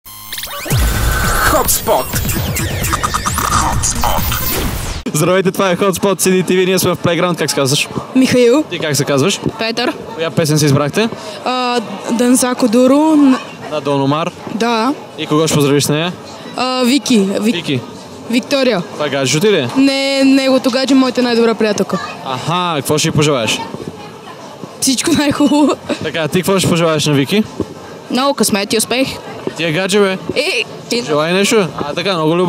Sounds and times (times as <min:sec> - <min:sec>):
Music: 0:00.1 - 0:04.8
Sound effect: 0:00.1 - 0:05.1.